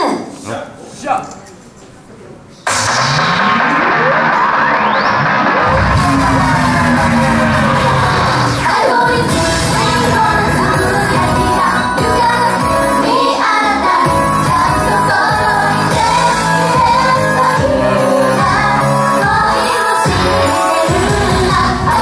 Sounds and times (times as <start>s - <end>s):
Music: 2.7s - 22.0s.